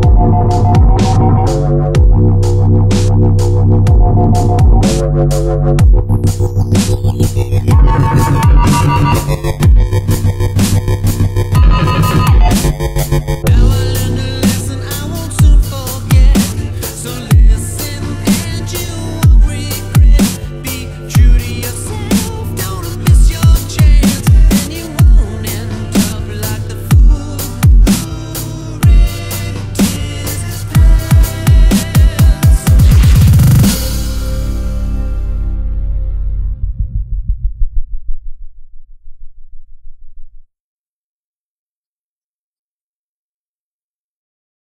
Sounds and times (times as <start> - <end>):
Music: 0.0 - 37.9.